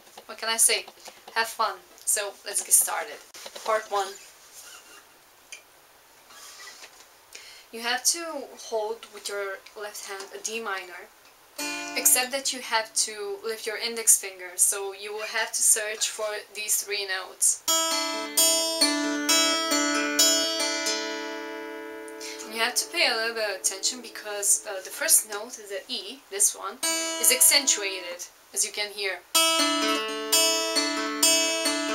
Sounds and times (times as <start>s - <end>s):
Speech: 0.3s - 4.2s, 7.7s - 11.1s, 12.0s - 17.6s, 22.4s - 29.2s
Guitar: 11.6s - 12.4s, 17.6s - 25.4s, 26.8s - 28.2s, 29.3s - 31.9s.